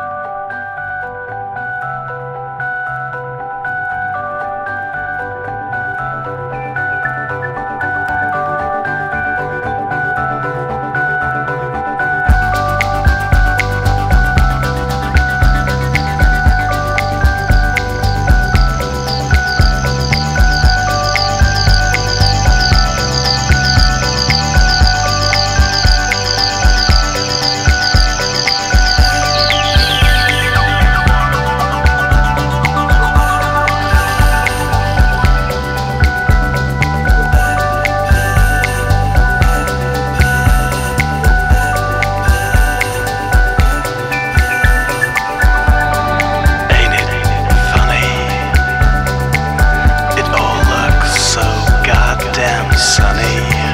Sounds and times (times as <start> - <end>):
Music: 0.0 - 53.7.